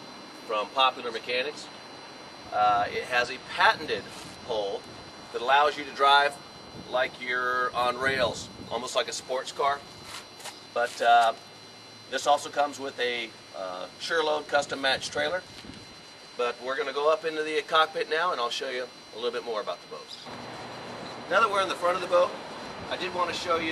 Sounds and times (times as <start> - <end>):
Speech: 0.5 - 1.7, 2.5 - 4.8, 5.4 - 9.8, 10.8 - 11.4, 12.1 - 15.4, 16.4 - 20.2, 21.3 - 22.3, 22.9 - 23.7.